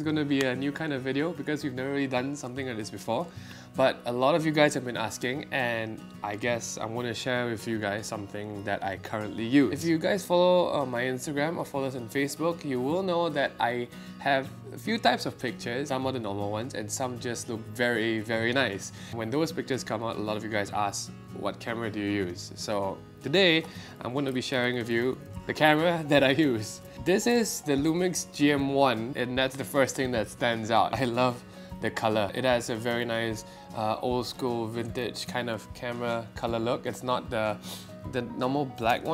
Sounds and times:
Music: 0.0s - 39.1s
Speech: 0.0s - 39.1s.

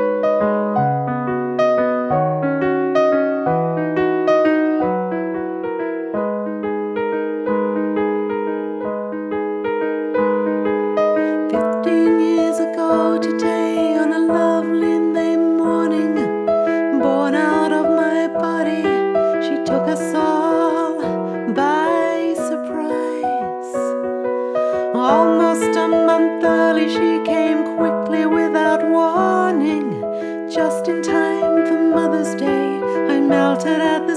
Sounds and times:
Music: 0.0s - 34.1s.

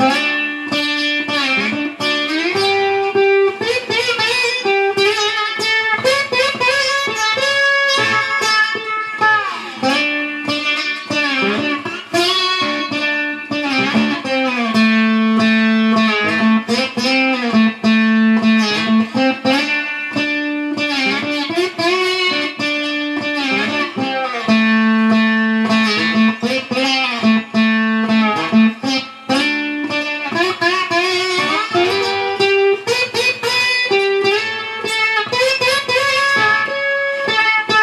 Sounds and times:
Strum: 0.0s - 37.8s.

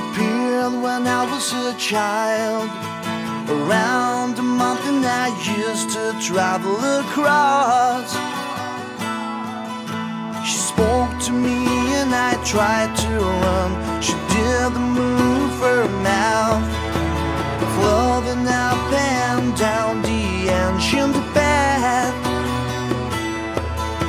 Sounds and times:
Music: 0.0s - 24.0s.

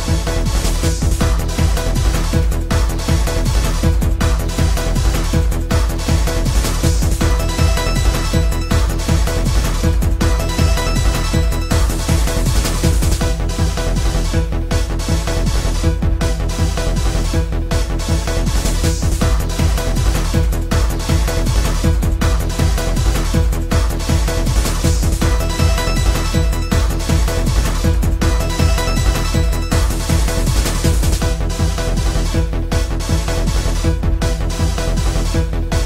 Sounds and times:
Music: 0.0s - 35.8s.

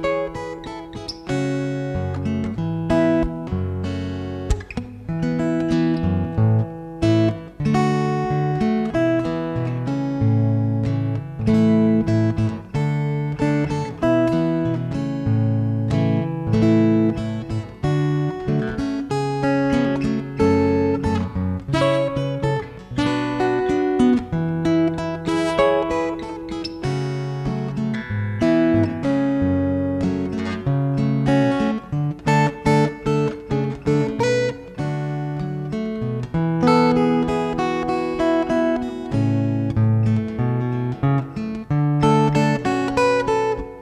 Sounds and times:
Music: 0.0s - 43.8s.

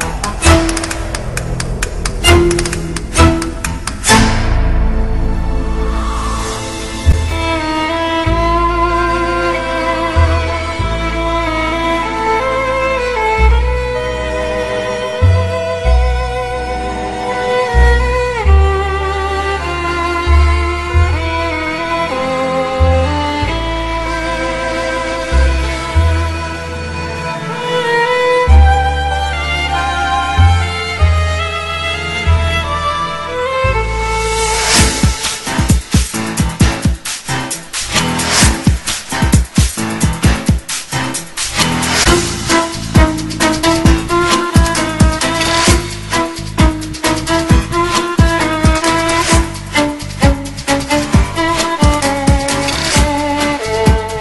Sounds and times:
Background music: 0.0s - 54.2s.

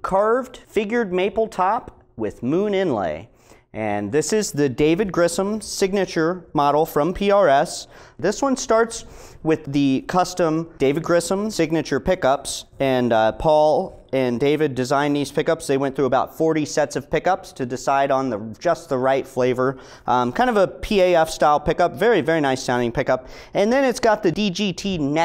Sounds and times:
Speech: 0.0s - 25.2s.

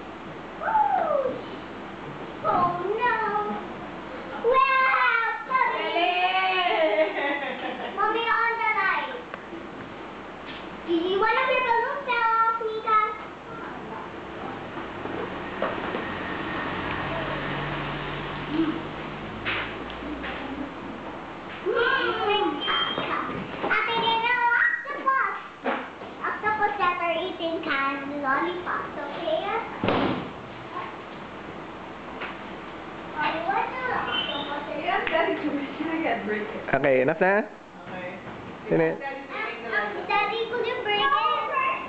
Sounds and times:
Children playing: 21.6s - 25.6s, 39.5s - 41.8s.

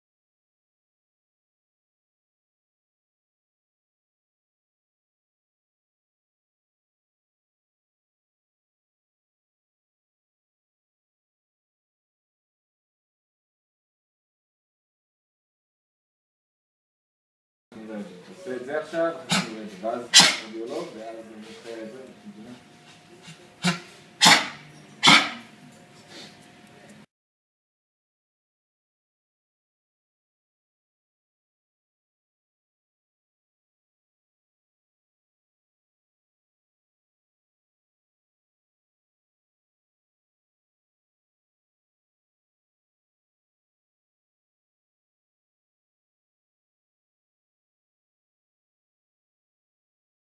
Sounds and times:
Speech: 17.8s - 23.6s.

